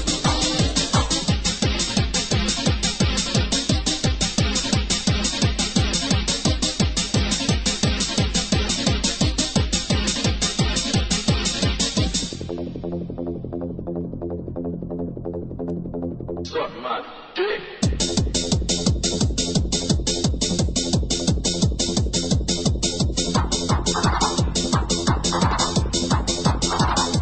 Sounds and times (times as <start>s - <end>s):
Electronic music: 0.0s - 27.2s.